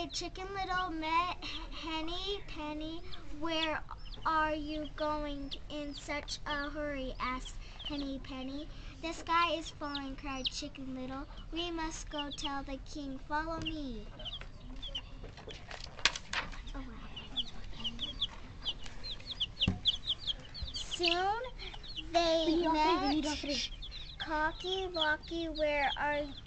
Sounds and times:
Speech: 0.0 - 15.0, 21.0 - 26.4.

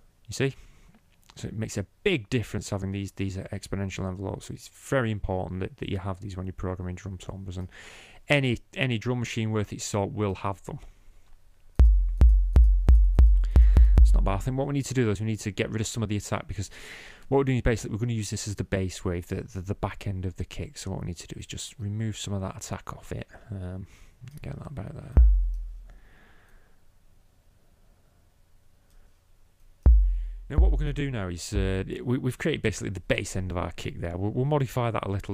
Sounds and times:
Speech: 0.3 - 0.6, 1.3 - 7.7, 8.3 - 10.9, 14.0 - 16.7, 17.3 - 25.2, 30.5 - 35.3.

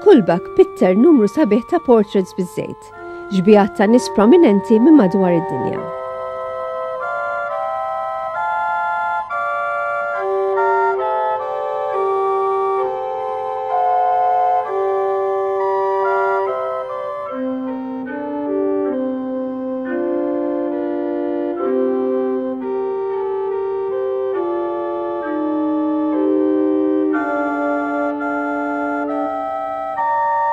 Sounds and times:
Speech: 0.0 - 5.9
Music: 0.0 - 30.5.

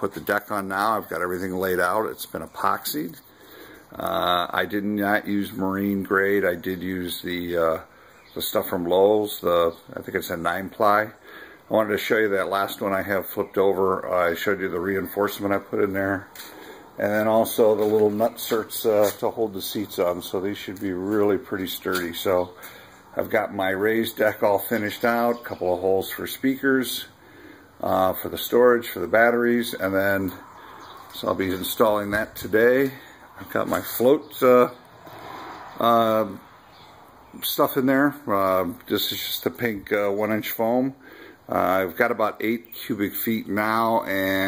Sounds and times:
Speech: 0.0 - 3.2, 3.9 - 16.4, 17.0 - 27.2, 27.8 - 30.5, 31.2 - 34.8, 35.8 - 36.4, 37.4 - 44.4.

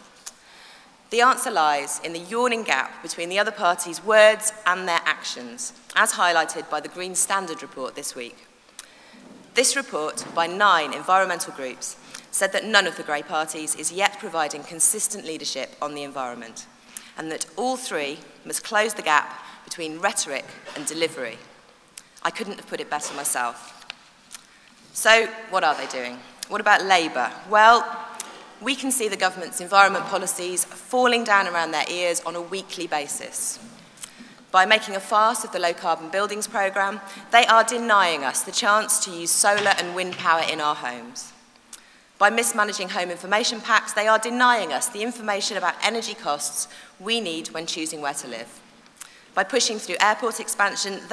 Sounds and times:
Narration, monologue: 0.0 - 51.1
Female speech, woman speaking: 1.2 - 8.3, 9.6 - 16.6, 17.2 - 21.4, 22.3 - 23.6, 25.0 - 27.9, 28.6 - 33.6, 34.6 - 41.3, 42.2 - 48.5, 49.4 - 51.1.

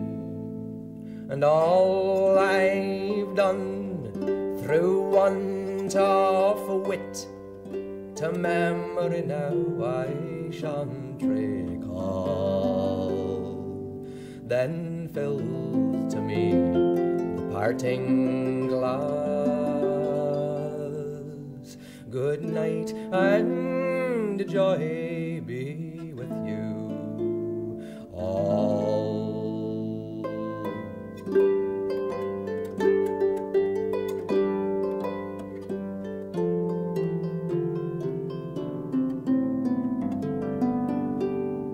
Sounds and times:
Music: 0.0 - 41.7.

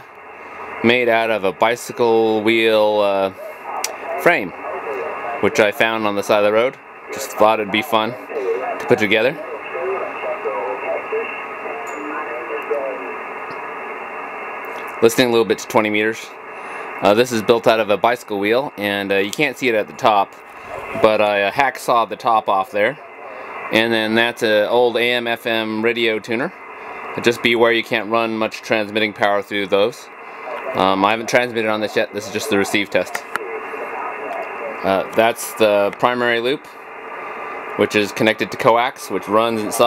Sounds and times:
Speech: 0.8 - 13.2, 15.0 - 16.4, 17.0 - 26.6, 27.2 - 36.8, 37.8 - 39.8.

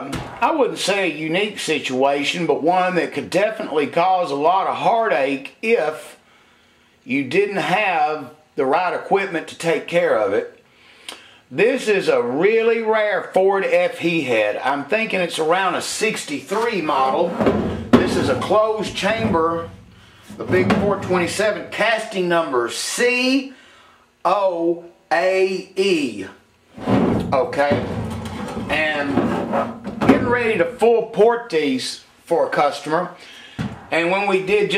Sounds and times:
Speech: 0.0 - 6.2, 7.1 - 10.6, 11.5 - 19.8, 20.4 - 23.6, 24.2 - 26.4, 27.3 - 27.9, 28.7 - 29.4, 30.0 - 33.2, 33.9 - 34.7.

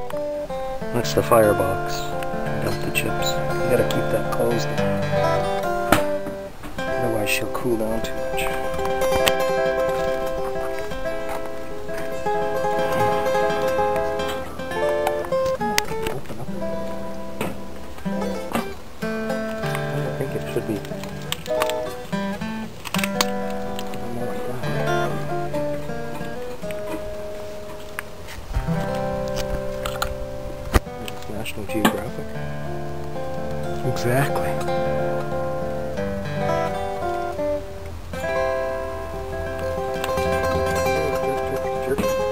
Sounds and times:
Music: 0.0 - 42.3
Speech: 0.9 - 4.9, 6.9 - 8.7, 15.8 - 16.7, 19.9 - 21.0, 24.0 - 25.2, 31.1 - 32.3, 33.8 - 34.7, 40.0 - 42.3.

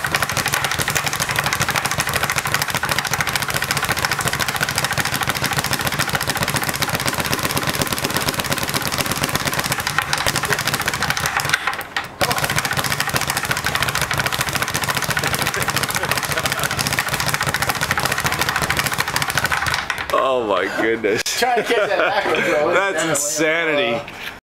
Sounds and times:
Speech: 20.1 - 24.1.

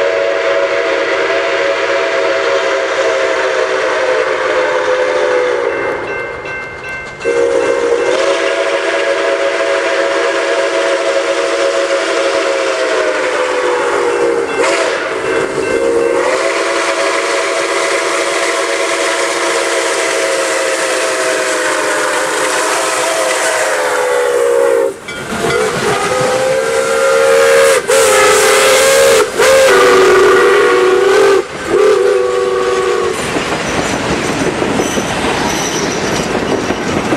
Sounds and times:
Steam whistle: 0.0 - 6.1, 7.3 - 33.4
Hiss: 7.8 - 25.0, 25.7 - 36.4.

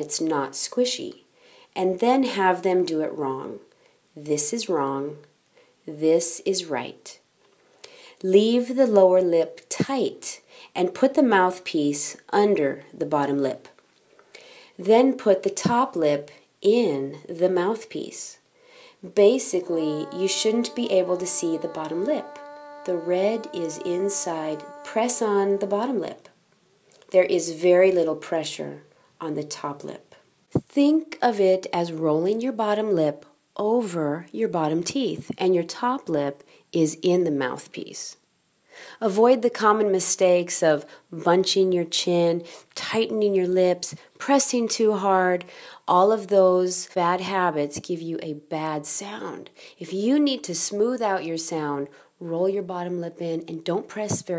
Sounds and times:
Speech: 0.0 - 5.3, 5.9 - 7.2, 8.2 - 13.8, 14.8 - 18.4, 19.0 - 26.3, 27.1 - 38.2, 39.0 - 54.3.

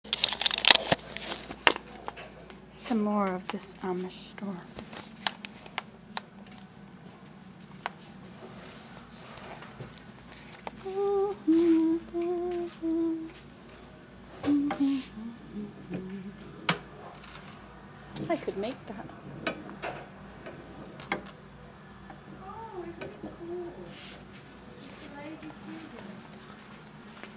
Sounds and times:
Speech: 2.7 - 4.7, 18.2 - 19.3, 24.8 - 26.2.

